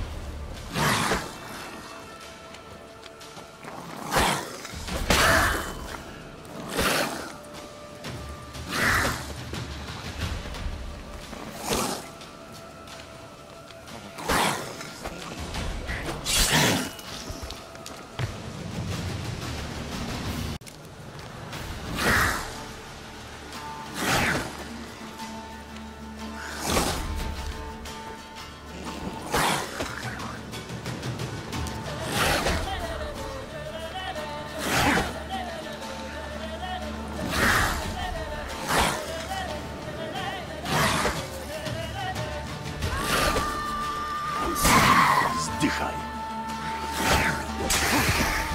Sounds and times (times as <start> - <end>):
Video game music: 0.0 - 48.5.